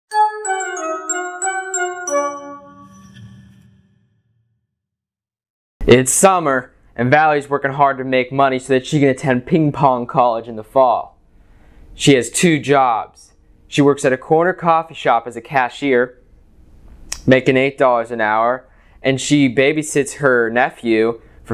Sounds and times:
Glockenspiel: 0.1 - 4.1
Speech: 5.8 - 11.2, 12.0 - 16.2, 17.2 - 21.5.

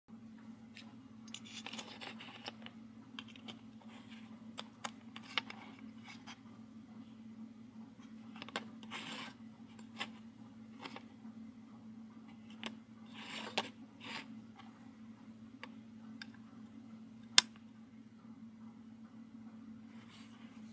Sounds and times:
Inside, small room: 0.1 - 20.7.

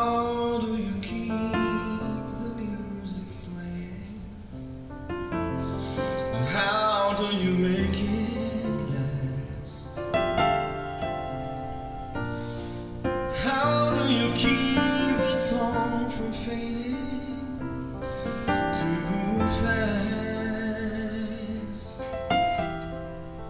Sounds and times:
Tender music: 1.2 - 23.4.

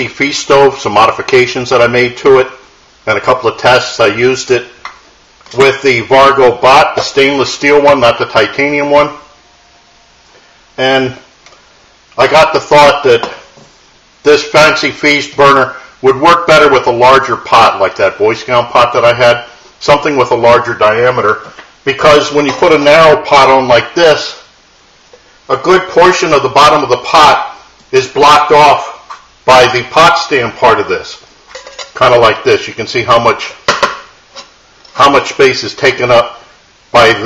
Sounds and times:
Speech: 0.0 - 4.8, 5.5 - 9.3, 10.8 - 11.3, 12.2 - 13.4, 14.2 - 24.5, 25.5 - 31.3, 32.0 - 33.7, 34.9 - 37.2.

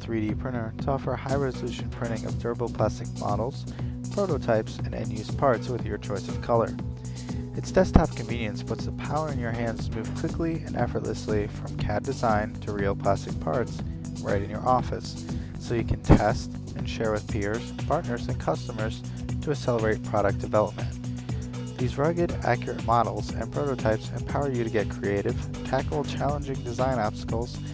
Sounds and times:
Speech: 0.0 - 6.8, 7.6 - 21.0, 21.8 - 27.7
Music: 0.0 - 27.7.

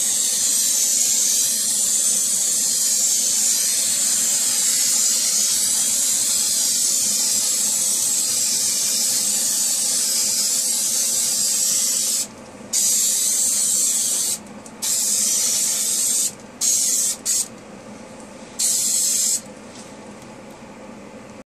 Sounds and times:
Spray: 0.0 - 17.5, 18.6 - 19.5.

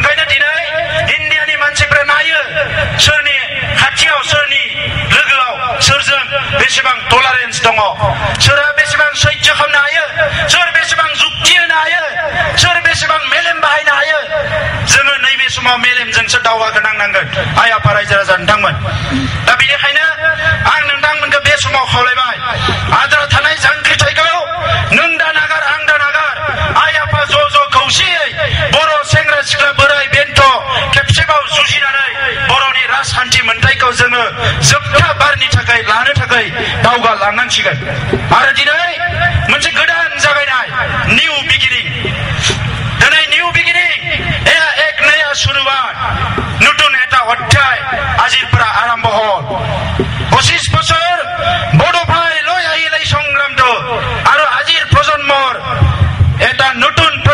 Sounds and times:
Male speech, man speaking: 0.0 - 18.8, 19.5 - 55.8, 56.4 - 57.3.

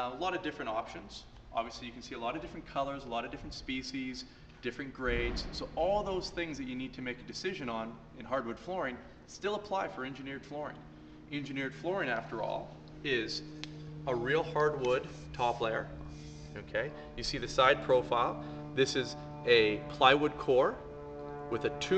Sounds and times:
Speech: 0.0 - 13.4, 14.1 - 15.9, 16.6 - 20.8, 21.5 - 21.9.

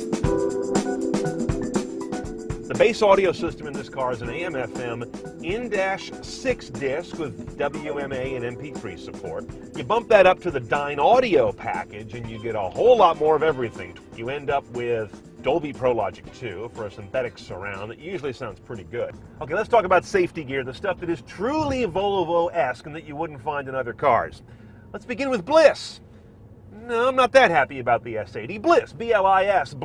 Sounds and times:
Speech: 2.7 - 24.4, 25.0 - 26.0, 26.7 - 29.8.

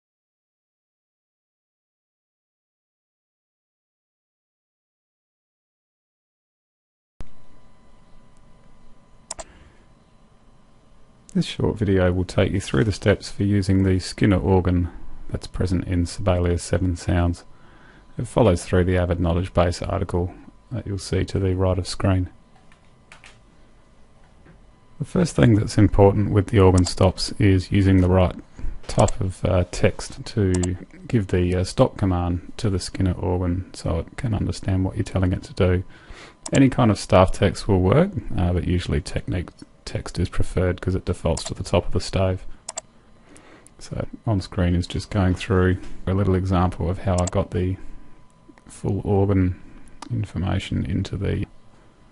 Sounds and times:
Speech: 11.3 - 17.5, 18.2 - 22.4, 25.0 - 35.9, 36.5 - 42.5, 43.8 - 47.9, 48.6 - 51.6.

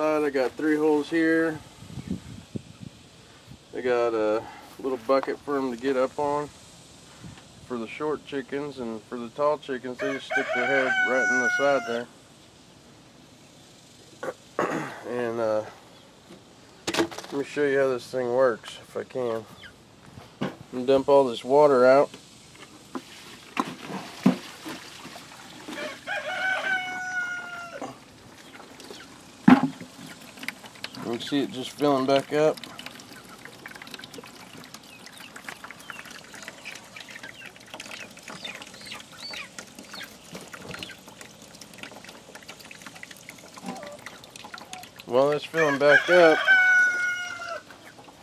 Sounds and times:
Speech: 0.0 - 1.6, 3.7 - 6.5, 7.7 - 12.1, 17.3 - 19.5, 20.7 - 22.1, 31.0 - 32.6, 45.1 - 46.4.

